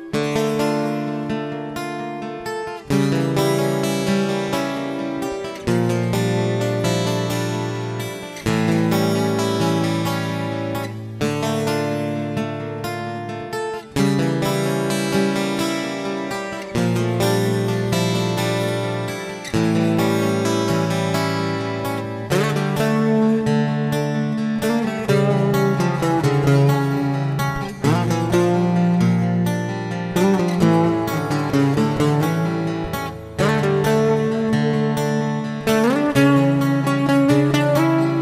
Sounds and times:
Electric guitar: 0:00.0 - 0:38.2
Strum: 0:00.0 - 0:38.2.

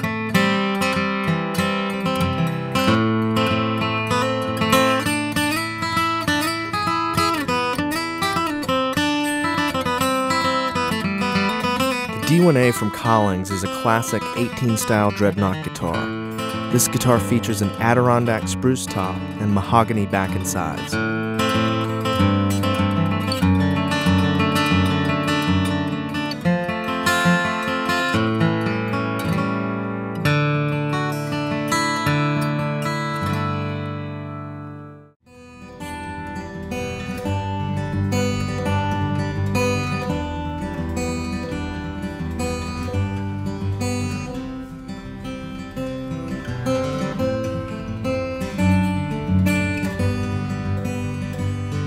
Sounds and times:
Speech: 0:12.2 - 0:16.1, 0:16.7 - 0:21.0.

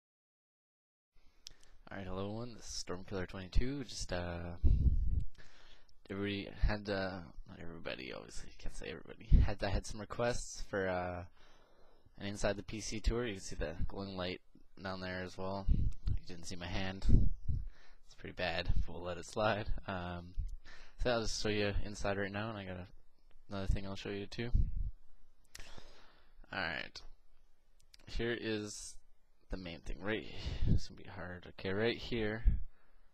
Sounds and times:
Speech: 0:01.8 - 0:04.8, 0:06.1 - 0:11.3, 0:12.2 - 0:17.3, 0:18.1 - 0:20.4, 0:21.0 - 0:24.7, 0:26.5 - 0:27.1, 0:28.0 - 0:32.6.

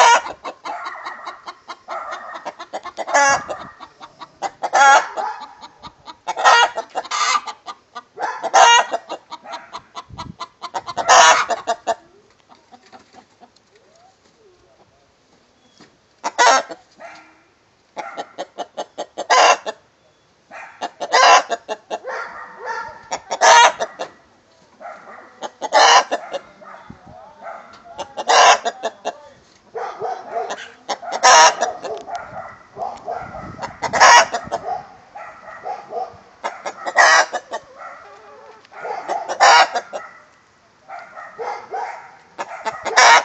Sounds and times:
Chicken, rooster: 0:00.0 - 0:14.9, 0:15.7 - 0:17.4, 0:18.0 - 0:19.8, 0:20.7 - 0:34.8, 0:36.4 - 0:40.1, 0:41.4 - 0:43.2.

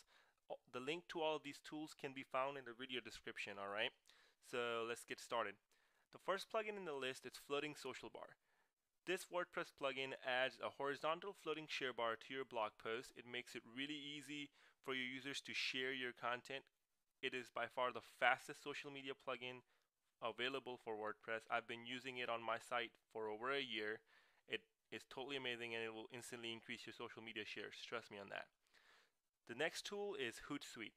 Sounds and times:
Speech: 0:00.0 - 0:05.6, 0:06.2 - 0:08.4, 0:09.0 - 0:28.6, 0:29.5 - 0:30.9.

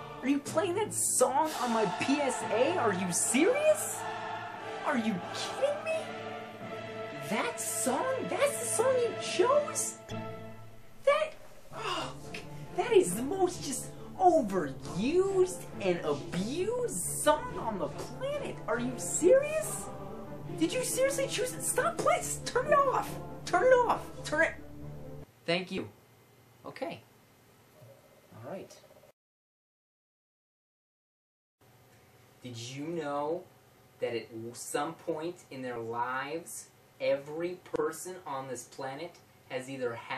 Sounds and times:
Music: 0:00.0 - 0:25.3
Speech: 0:00.2 - 0:04.0, 0:04.8 - 0:06.1, 0:07.2 - 0:10.0, 0:11.1 - 0:19.9, 0:20.6 - 0:24.6, 0:25.4 - 0:26.0, 0:26.6 - 0:27.1, 0:28.3 - 0:28.8, 0:32.4 - 0:40.1.

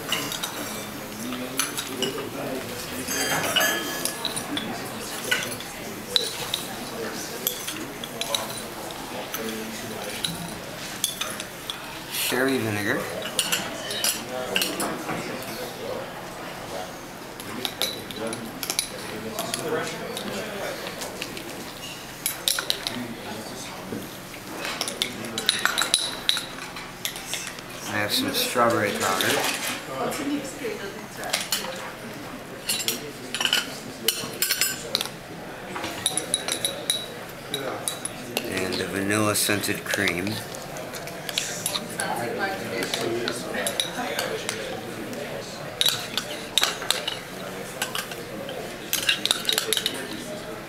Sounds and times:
Speech: 0:11.2 - 0:21.2, 0:27.8 - 0:50.6.

